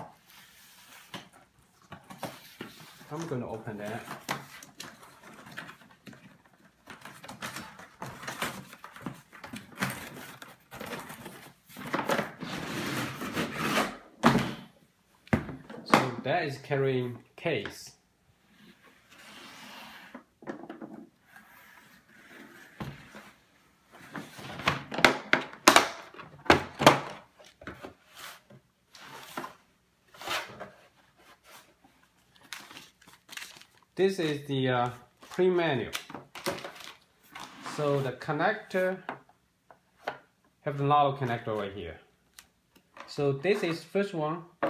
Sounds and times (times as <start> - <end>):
Speech: 3.1 - 4.2, 15.8 - 18.0, 34.0 - 36.1, 37.7 - 39.1, 40.6 - 42.1, 43.0 - 44.6.